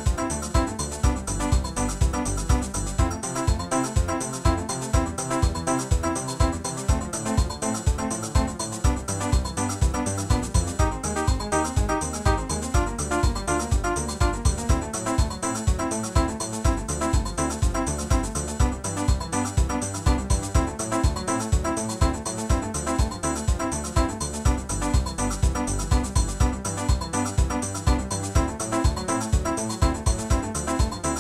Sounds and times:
Video game music: 0:01.7 - 0:31.2.

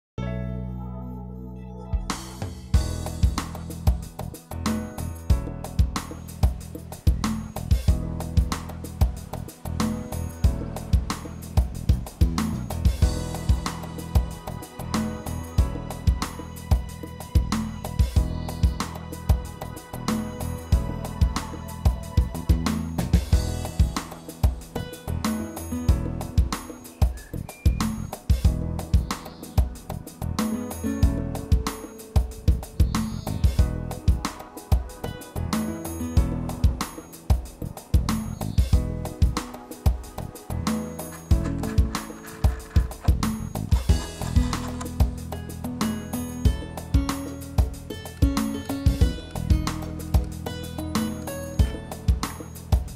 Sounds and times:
Music: 0:00.2 - 0:52.9.

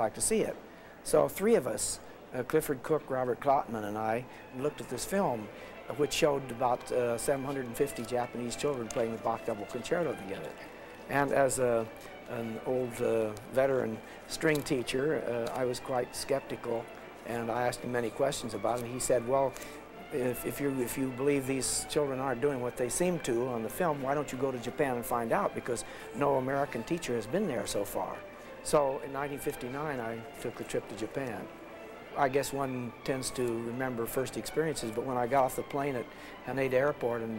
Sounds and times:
Speech: 0:00.0 - 0:19.5, 0:20.1 - 0:31.5, 0:32.2 - 0:37.3
Violin, fiddle: 0:00.0 - 0:37.3.

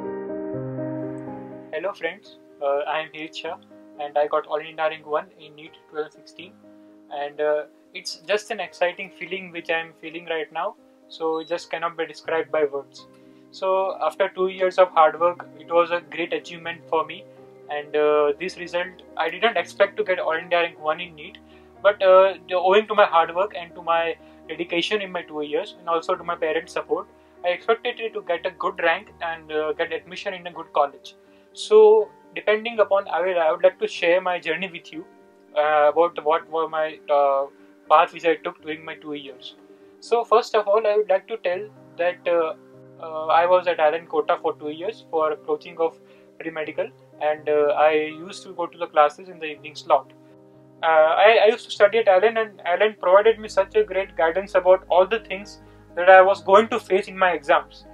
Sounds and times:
Music: 0:00.0 - 0:57.9
Speech: 0:01.8 - 0:06.5, 0:07.1 - 0:13.0, 0:13.6 - 0:50.0, 0:50.8 - 0:57.9.

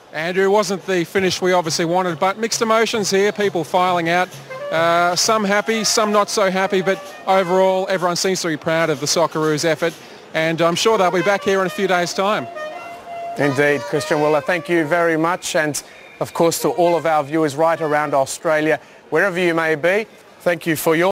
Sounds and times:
Speech: 0:00.2 - 0:12.5, 0:13.4 - 0:21.1
Music: 0:02.0 - 0:09.6, 0:10.4 - 0:15.3.

